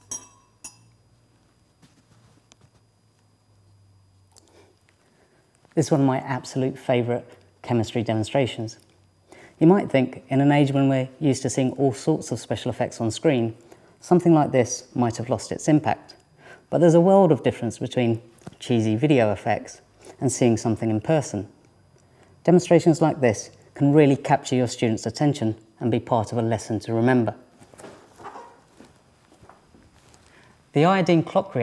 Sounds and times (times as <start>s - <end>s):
Speech: 5.8s - 8.8s, 9.6s - 21.5s, 22.4s - 27.4s, 30.7s - 31.6s.